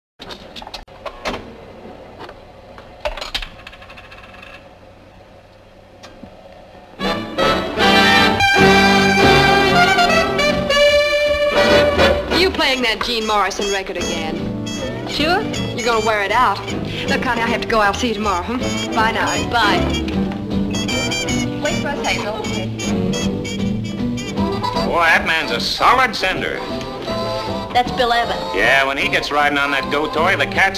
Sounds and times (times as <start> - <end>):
Inside, large room or hall: 7.0 - 12.5
Music: 7.0 - 30.7.